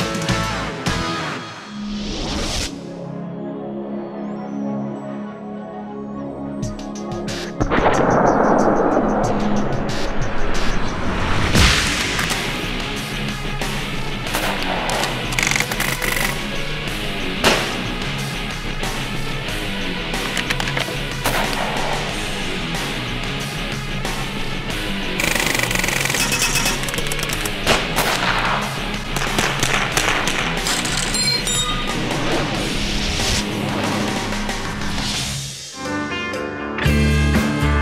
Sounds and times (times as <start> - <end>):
Machine gun: 15.4 - 16.4, 25.2 - 28.6.